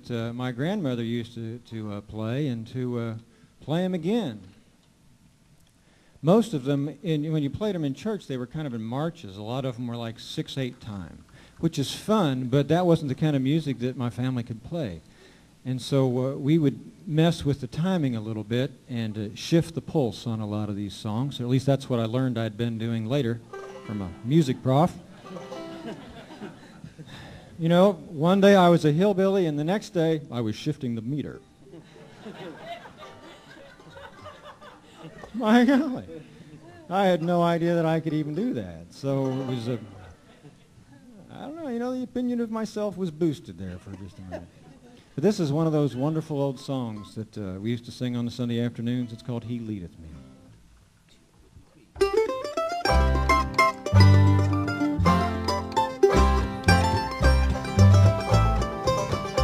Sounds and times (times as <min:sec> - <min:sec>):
Speech: 0:00.0 - 0:04.5, 0:06.2 - 0:15.0, 0:15.6 - 0:25.0, 0:27.6 - 0:31.4, 0:35.3 - 0:40.2, 0:41.0 - 0:50.2.